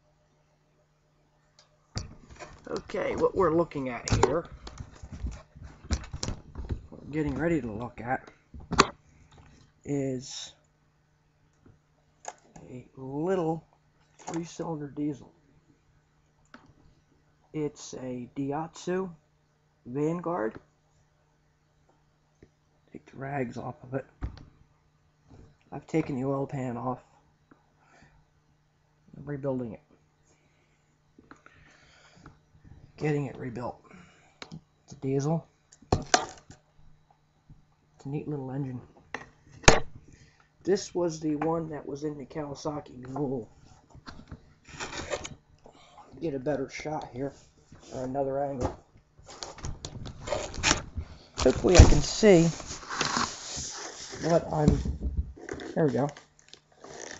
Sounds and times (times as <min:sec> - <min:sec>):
Speech: 0:02.7 - 0:04.5, 0:07.0 - 0:08.3, 0:09.9 - 0:10.6, 0:12.6 - 0:13.7, 0:14.3 - 0:15.3, 0:17.6 - 0:19.2, 0:19.9 - 0:20.6, 0:23.0 - 0:24.1, 0:25.7 - 0:27.1, 0:29.2 - 0:29.8, 0:33.0 - 0:33.8, 0:35.0 - 0:35.5, 0:38.0 - 0:38.9, 0:40.7 - 0:43.5, 0:46.1 - 0:48.8, 0:51.4 - 0:52.6, 0:54.2 - 0:54.9, 0:55.6 - 0:56.2.